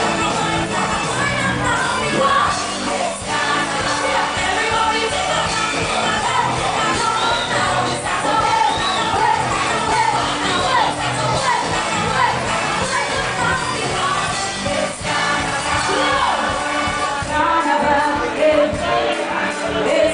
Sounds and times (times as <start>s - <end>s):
Exciting music: 0.0s - 20.1s.